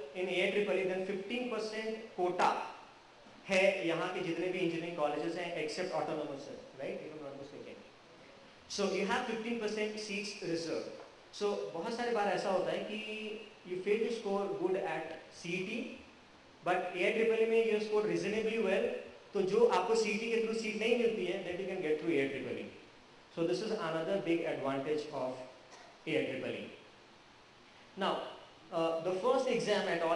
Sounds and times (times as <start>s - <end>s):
Male speech, man speaking: 0.0s - 2.8s, 3.5s - 7.9s, 8.7s - 16.0s, 16.6s - 22.8s, 23.4s - 25.5s, 26.1s - 26.8s, 28.0s - 30.1s.